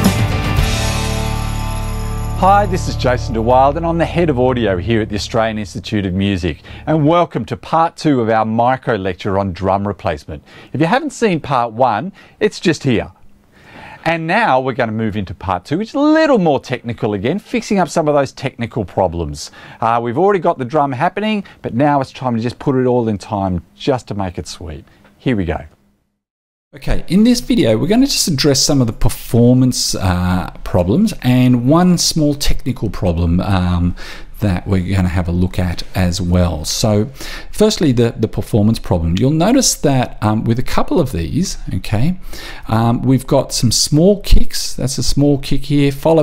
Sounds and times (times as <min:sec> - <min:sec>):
Speech: 0:02.4 - 0:13.2, 0:14.0 - 0:25.8, 0:26.8 - 0:46.2.